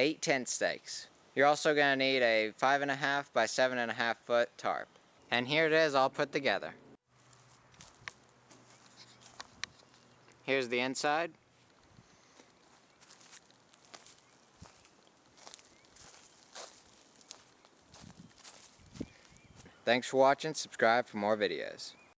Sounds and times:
Speech: 0.0 - 6.8, 10.5 - 11.3, 19.9 - 22.0
Outside, rural or natural: 0.0 - 22.1
Walk, footsteps: 7.3 - 10.1, 12.4 - 19.1.

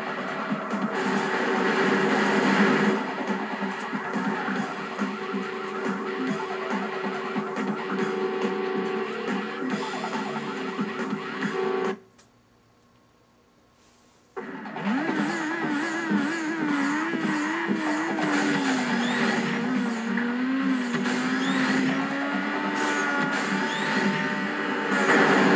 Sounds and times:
Music: 0.0 - 12.0, 14.4 - 25.5
Vehicle: 14.4 - 25.5.

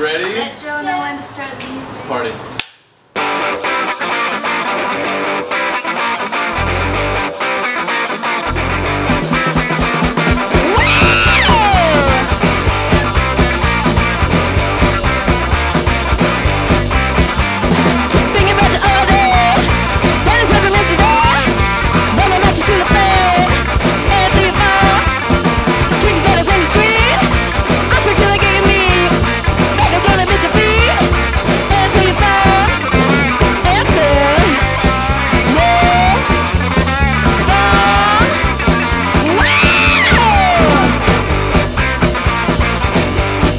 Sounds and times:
Exciting music: 8.4 - 43.5.

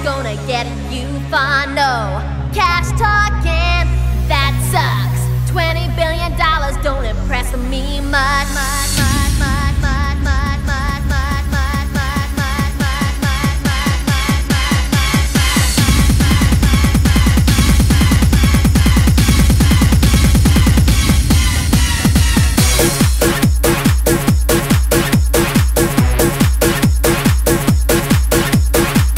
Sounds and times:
Trance music: 0.0 - 29.1.

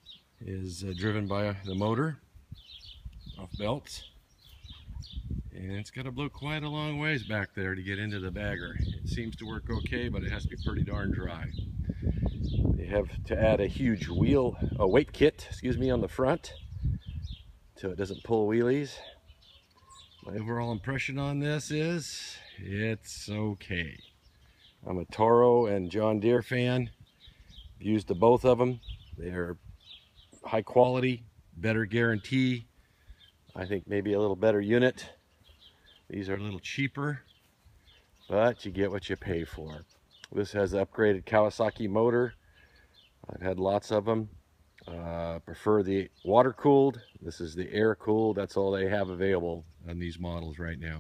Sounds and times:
Outside, rural or natural: 0.0 - 51.0
Speech: 0.4 - 2.2, 3.3 - 4.2, 5.5 - 11.6, 12.8 - 16.6, 17.8 - 19.2, 20.2 - 24.1, 24.8 - 27.0, 27.8 - 29.6, 30.4 - 32.7, 33.5 - 35.2, 36.1 - 37.3, 38.3 - 42.4, 43.3 - 51.0.

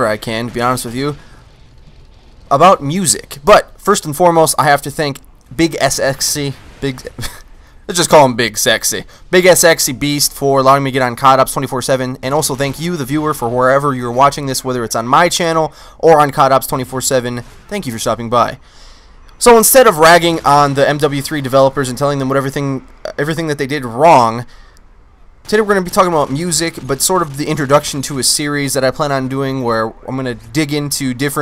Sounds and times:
Speech: 0.0 - 1.2, 2.5 - 18.6, 19.4 - 24.5, 25.5 - 31.4.

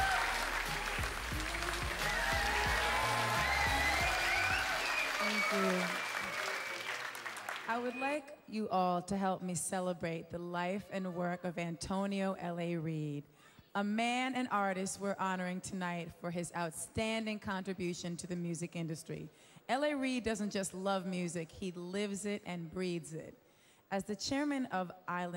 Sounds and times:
Speech: 7.7 - 13.2, 13.8 - 23.3, 23.9 - 25.3.

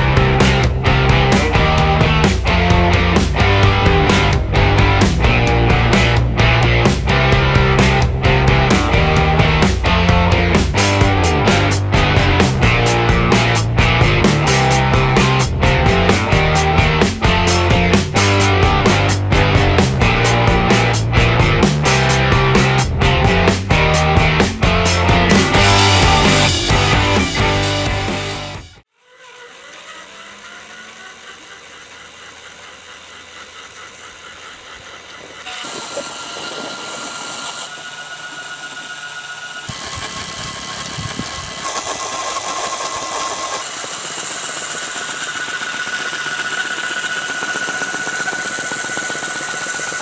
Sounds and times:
Helicopter: 0.0 - 28.3, 29.6 - 35.5, 37.2 - 50.0.

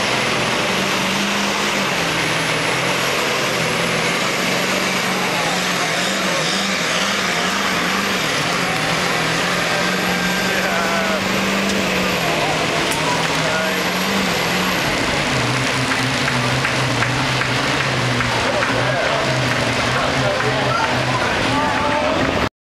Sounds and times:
Truck: 0.0 - 22.5
Speech: 8.5 - 11.4, 12.0 - 14.2, 18.3 - 22.5.

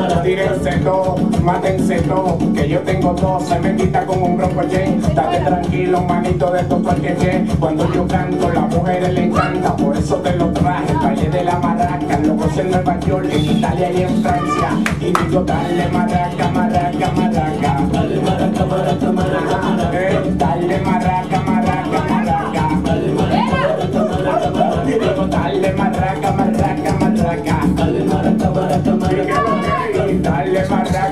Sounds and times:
Maraca: 0.0 - 31.1
Salsa music: 0.0 - 31.1.

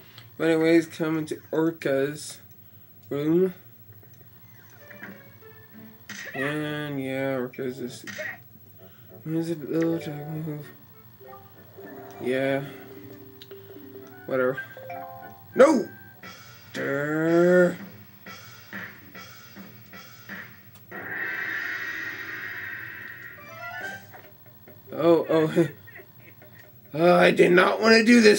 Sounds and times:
Music: 4.5 - 6.4, 8.8 - 21.0, 23.3 - 27.3
Speech: 9.3 - 10.8, 27.0 - 28.3.

